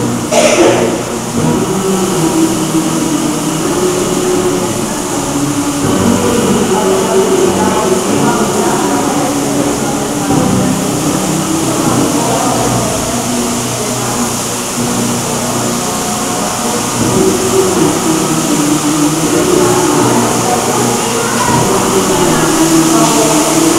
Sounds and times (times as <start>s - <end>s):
Music: 0.0s - 23.7s.